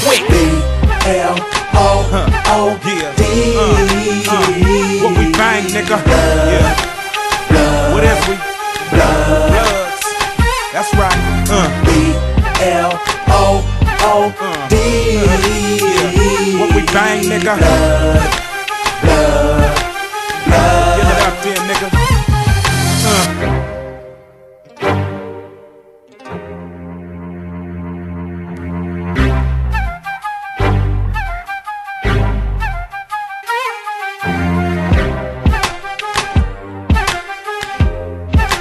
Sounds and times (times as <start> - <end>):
Rhythm and blues: 0.0 - 24.0, 28.4 - 38.6.